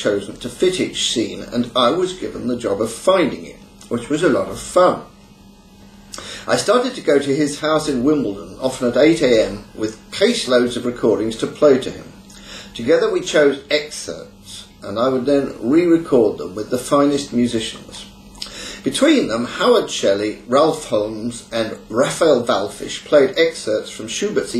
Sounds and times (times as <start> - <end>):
Speech: 0.0 - 5.2, 6.4 - 18.2, 18.8 - 24.5.